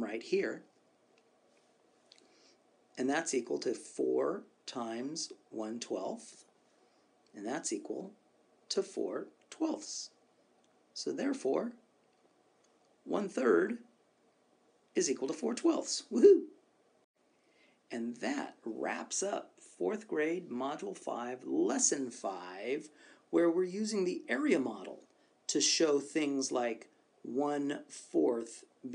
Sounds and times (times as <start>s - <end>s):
Narration, monologue: 0.0s - 28.9s.